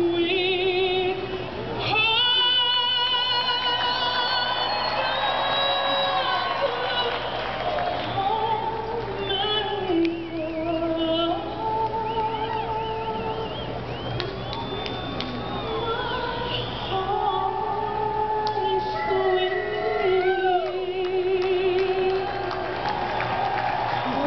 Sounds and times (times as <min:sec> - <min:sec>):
Female singing: 0:00.0 - 0:13.7, 0:15.2 - 0:22.8, 0:24.0 - 0:24.2.